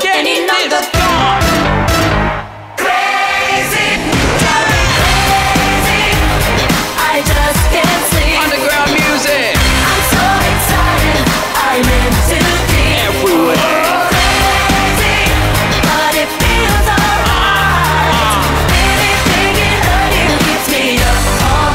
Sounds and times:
Music: 0.0s - 21.7s.

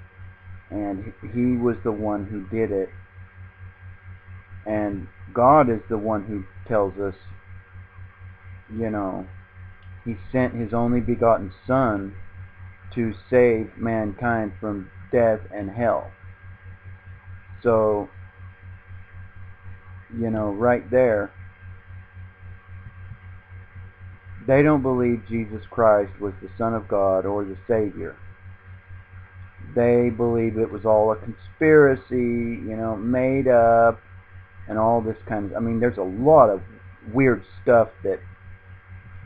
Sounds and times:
Speech: 0.7s - 3.0s, 4.7s - 7.2s, 8.7s - 9.3s, 10.1s - 12.2s, 12.9s - 16.2s, 17.6s - 18.1s, 20.1s - 21.4s, 24.4s - 28.2s, 29.6s - 34.0s, 34.7s - 38.2s.

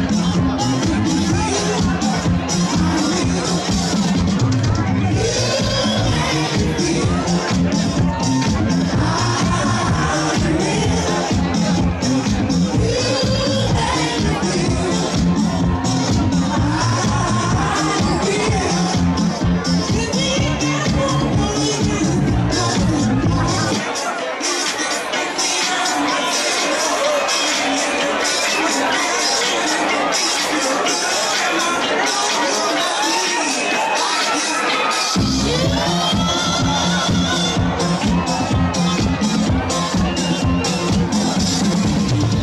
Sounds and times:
Disco: 0.0s - 42.4s.

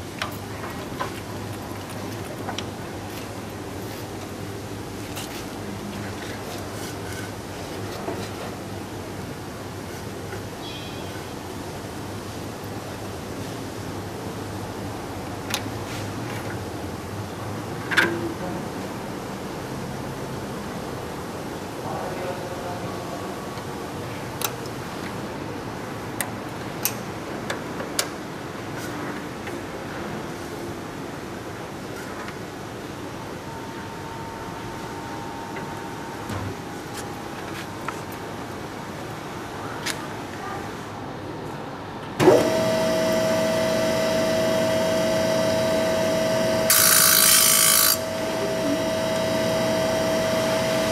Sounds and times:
Speech: 18.0s - 19.0s, 21.8s - 23.6s.

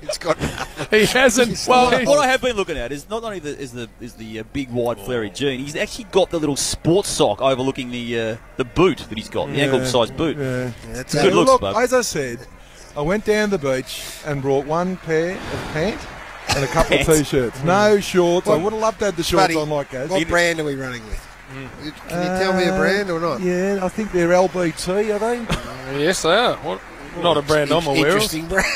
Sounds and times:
Speech: 0.0s - 12.4s, 13.0s - 28.7s.

